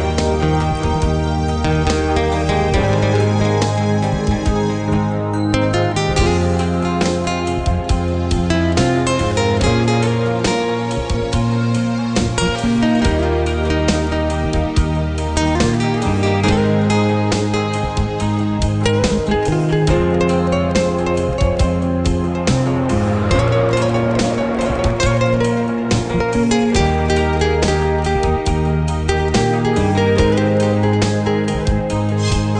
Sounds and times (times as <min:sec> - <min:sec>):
Acoustic guitar: 0:00.0 - 0:32.5.